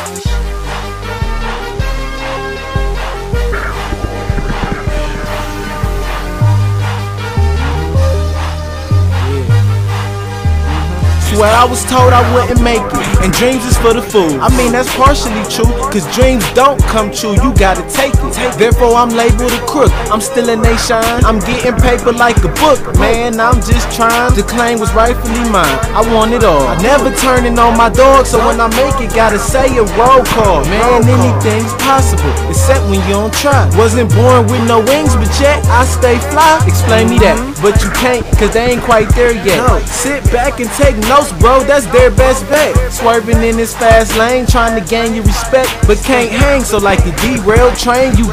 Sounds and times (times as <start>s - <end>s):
Soundtrack music: 0.0s - 48.3s.